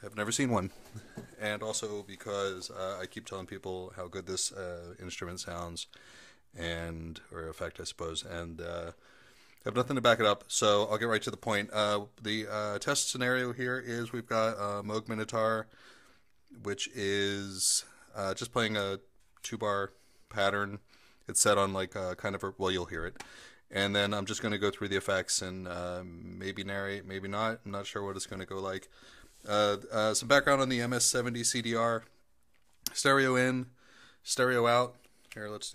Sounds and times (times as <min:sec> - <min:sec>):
Speech: 0:00.0 - 0:00.8, 0:01.4 - 0:05.9, 0:06.6 - 0:09.0, 0:09.6 - 0:15.7, 0:16.5 - 0:32.2, 0:32.9 - 0:35.7.